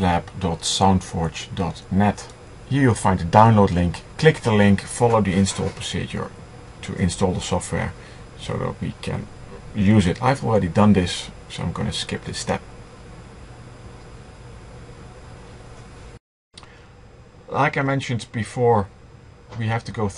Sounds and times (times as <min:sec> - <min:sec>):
Speech: 0:00.0 - 0:12.6, 0:17.5 - 0:18.9, 0:19.5 - 0:20.1.